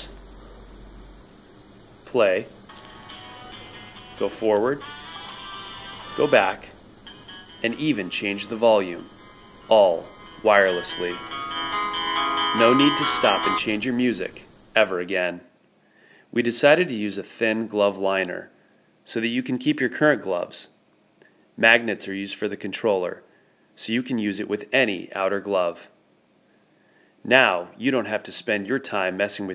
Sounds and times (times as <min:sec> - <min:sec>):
Speech: 0:00.0 - 0:00.2, 0:02.1 - 0:02.5, 0:04.2 - 0:04.8, 0:06.2 - 0:06.7, 0:07.6 - 0:09.1, 0:09.7 - 0:11.2, 0:12.6 - 0:15.5, 0:16.4 - 0:20.8, 0:21.6 - 0:26.0, 0:27.3 - 0:29.5
Inside, small room: 0:00.0 - 0:29.5
Music: 0:02.7 - 0:13.8.